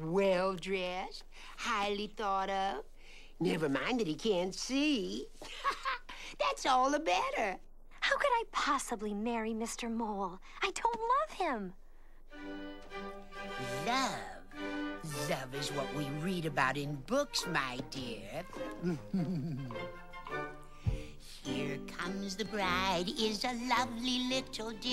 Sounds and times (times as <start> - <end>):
Speech: 0.0 - 11.8, 13.6 - 18.5, 21.4 - 24.9
Music: 12.2 - 24.9.